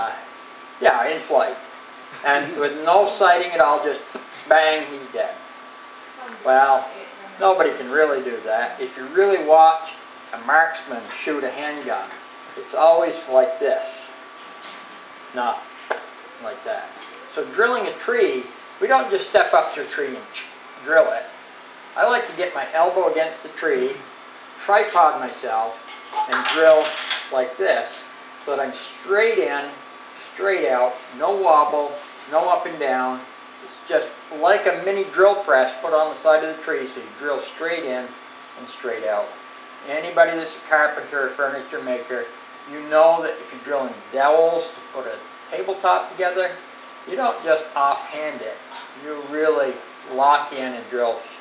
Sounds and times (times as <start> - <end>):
Speech: 0.0 - 1.6, 2.2 - 5.4, 6.2 - 14.2, 15.3 - 15.7, 16.4 - 21.4, 22.0 - 51.4.